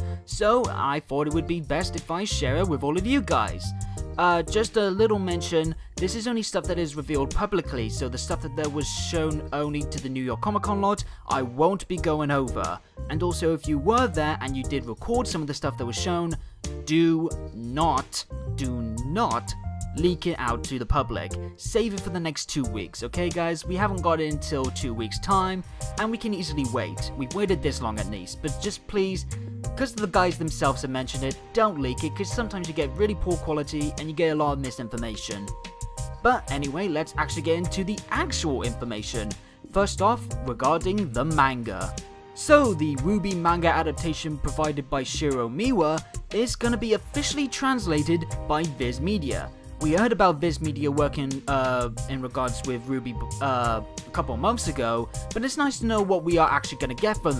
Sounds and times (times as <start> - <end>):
Music: 0.0 - 57.3
Speech: 0.3 - 35.6, 36.2 - 57.3.